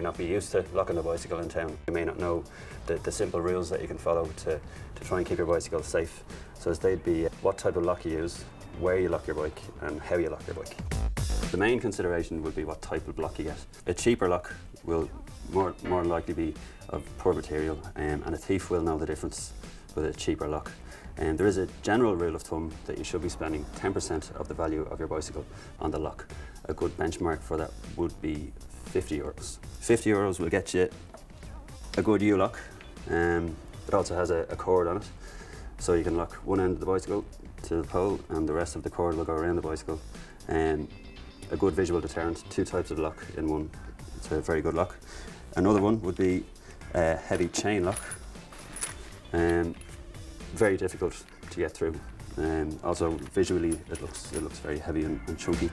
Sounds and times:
Speech: 0.0 - 10.8, 11.5 - 35.1, 35.8 - 48.2, 49.3 - 49.8, 50.5 - 55.7
Music: 0.0 - 55.7.

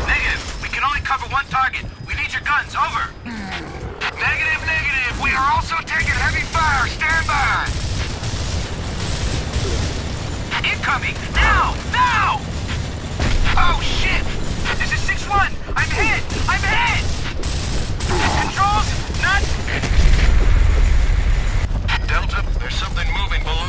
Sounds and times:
Speech: 10.6 - 12.4, 13.5 - 17.0, 21.9 - 23.6.

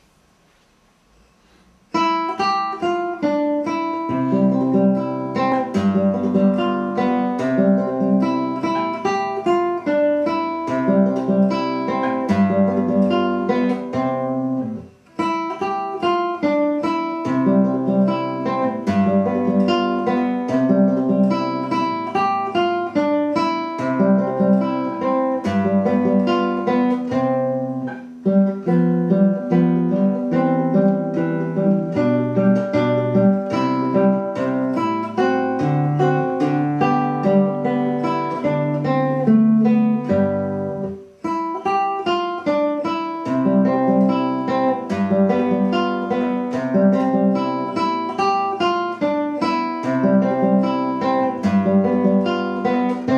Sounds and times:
Acoustic guitar: 0.0 - 53.1
Strum: 0.0 - 53.1.

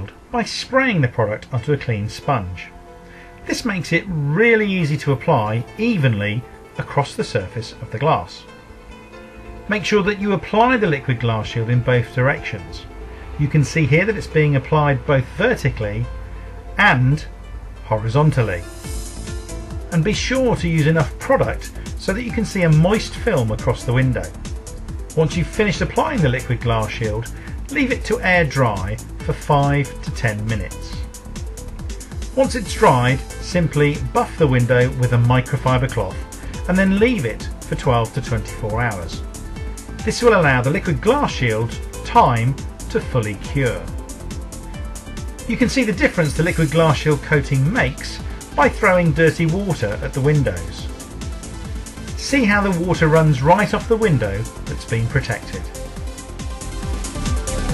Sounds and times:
Speech: 0.0 - 2.7, 3.5 - 8.5, 9.7 - 16.1, 16.8 - 18.7, 19.9 - 24.4, 25.2 - 31.1, 32.4 - 39.2, 40.0 - 44.0, 45.5 - 50.9, 52.2 - 55.8
Music: 0.0 - 57.7.

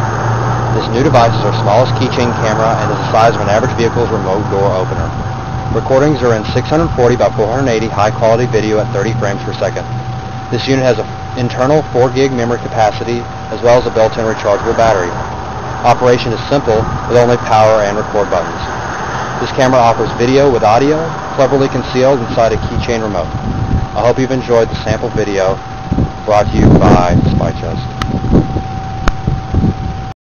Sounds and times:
Speech: 0.8 - 5.2, 5.8 - 9.9, 10.5 - 15.2, 15.8 - 18.7, 19.4 - 23.3, 24.0 - 25.6, 26.3 - 27.9.

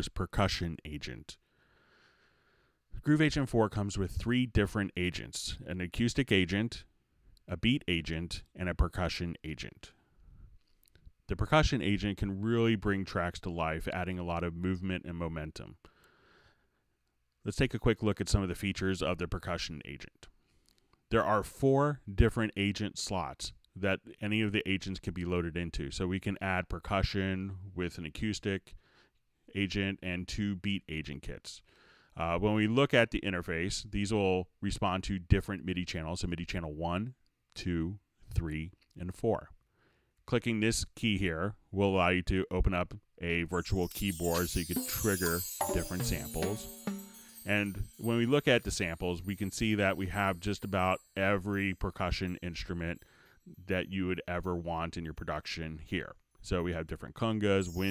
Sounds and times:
Speech: 0.0 - 1.4, 2.9 - 10.0, 11.3 - 15.8, 17.4 - 20.3, 21.1 - 28.8, 29.5 - 39.6, 40.3 - 57.9.

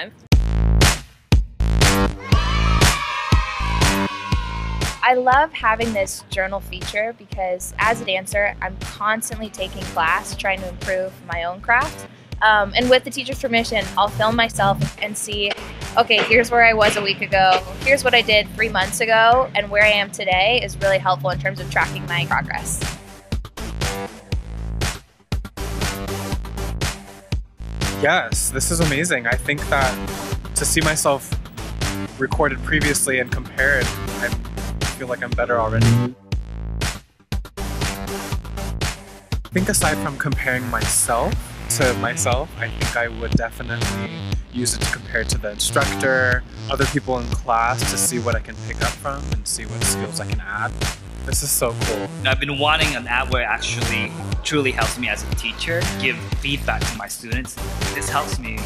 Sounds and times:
Music: 0.0 - 58.6
Speech: 5.0 - 22.8, 28.0 - 30.0, 30.6 - 31.3, 32.2 - 34.4, 35.0 - 36.1, 39.6 - 50.7, 51.3 - 58.6.

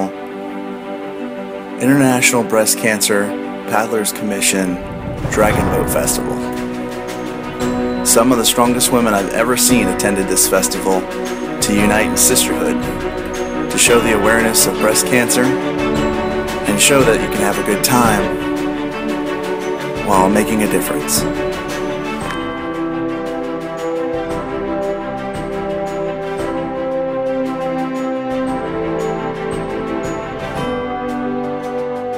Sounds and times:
Music: 0.0 - 32.1
Speech: 1.8 - 6.6, 8.1 - 13.0, 13.7 - 15.6, 16.6 - 18.4, 20.0 - 21.3.

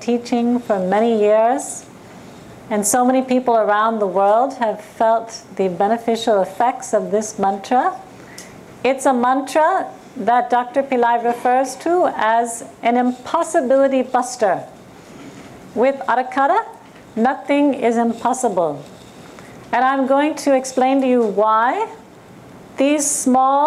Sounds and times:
Speech: 0.0 - 1.9, 2.7 - 8.1, 8.8 - 14.8, 15.8 - 18.9, 19.7 - 22.0, 22.8 - 23.6.

